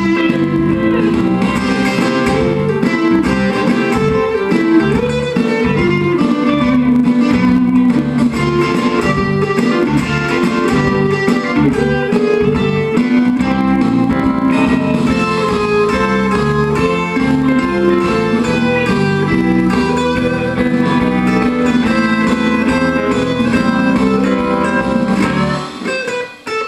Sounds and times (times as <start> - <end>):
Guitar: 0.0 - 26.6.